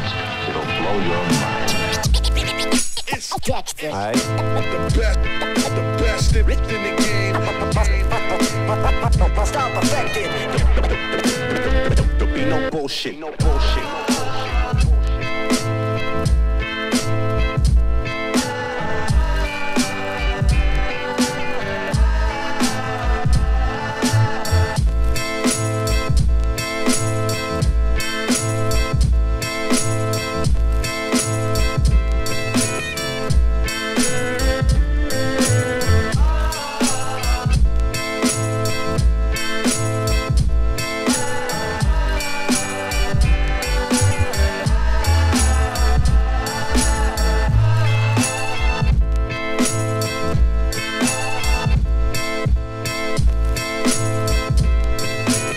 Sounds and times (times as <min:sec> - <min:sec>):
Music: 0:00.0 - 0:55.5.